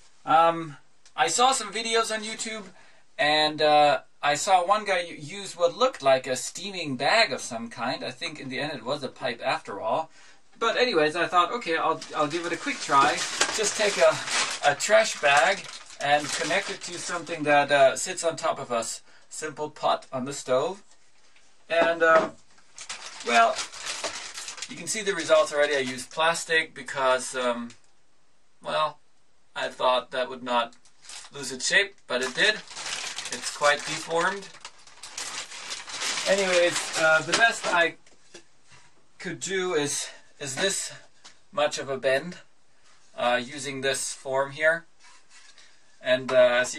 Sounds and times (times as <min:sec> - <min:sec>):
Speech: 0:00.2 - 0:20.9, 0:21.7 - 0:22.4, 0:23.2 - 0:23.7, 0:24.7 - 0:27.8, 0:28.6 - 0:29.0, 0:29.6 - 0:32.7, 0:33.3 - 0:34.6, 0:36.2 - 0:38.0, 0:39.2 - 0:42.5, 0:43.2 - 0:44.9, 0:46.0 - 0:46.7.